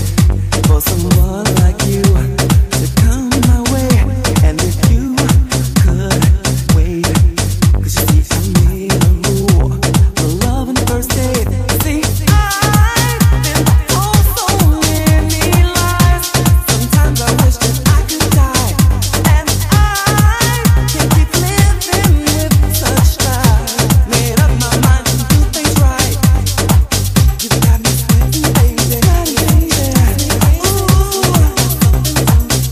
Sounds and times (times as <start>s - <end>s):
Afrobeat: 0.0s - 32.7s.